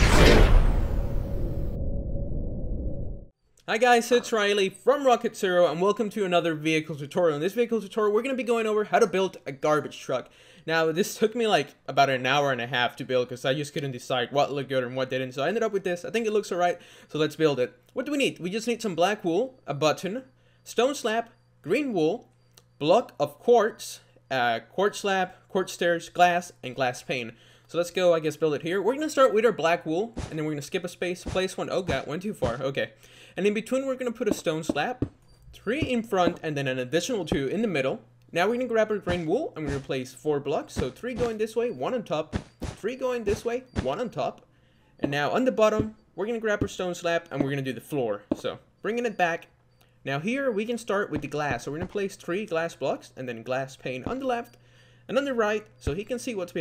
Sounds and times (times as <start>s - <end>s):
Speech: 3.6s - 35.0s, 35.6s - 44.4s, 45.0s - 49.5s, 50.1s - 54.5s, 55.1s - 56.6s.